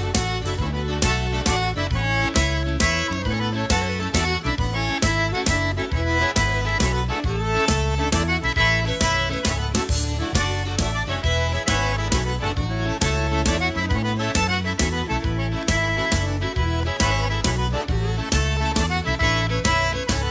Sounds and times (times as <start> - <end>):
Music: 0.0 - 20.3.